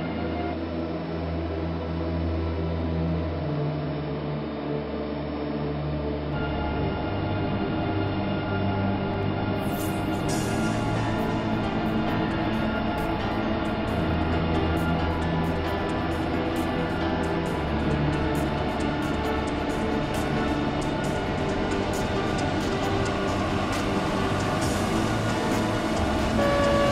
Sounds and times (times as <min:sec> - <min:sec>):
Music: 0:00.0 - 0:26.9
Train: 0:00.0 - 0:26.9.